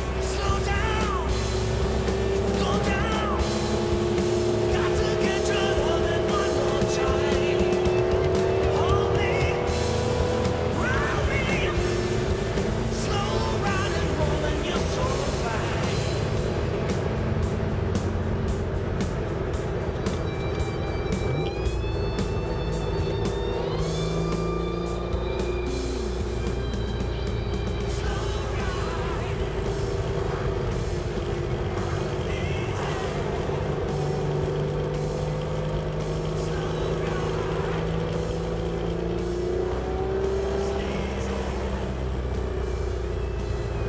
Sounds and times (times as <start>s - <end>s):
Engine: 0.0s - 43.8s
Music: 0.0s - 43.8s
Vehicle: 0.0s - 43.8s.